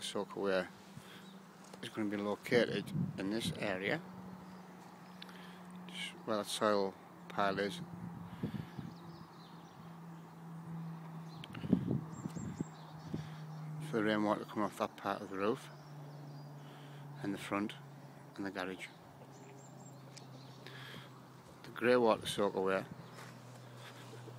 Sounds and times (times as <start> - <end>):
Speech: 0.0 - 0.7, 1.8 - 4.0, 5.9 - 7.8, 13.8 - 15.7, 17.2 - 17.8, 18.4 - 19.0, 21.6 - 22.9.